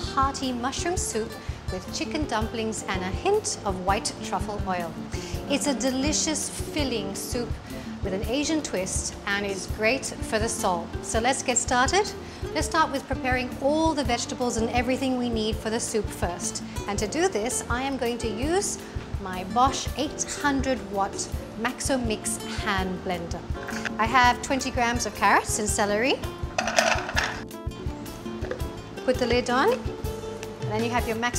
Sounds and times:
Music: 0.0 - 31.3
Speech: 8.1 - 23.4, 24.0 - 26.3, 29.1 - 29.9, 30.7 - 31.3.

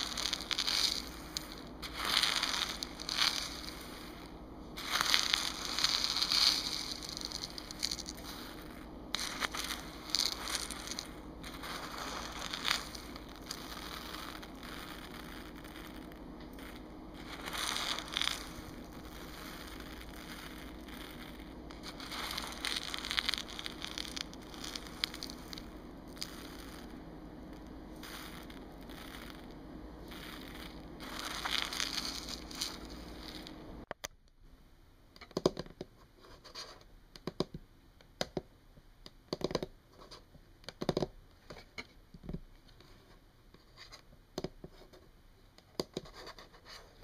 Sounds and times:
Scratching (performance technique): 0.0 - 33.8.

